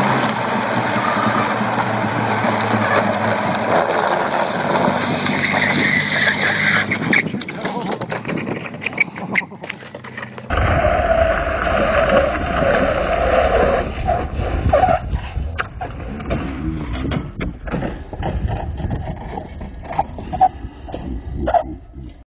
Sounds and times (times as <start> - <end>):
Vehicle: 0.0 - 22.2.